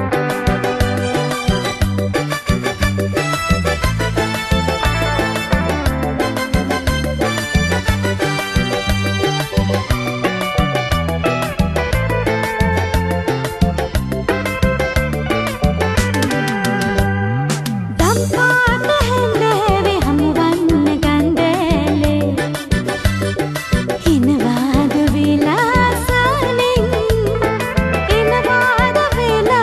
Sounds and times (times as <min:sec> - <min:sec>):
Music: 0:00.0 - 0:29.6.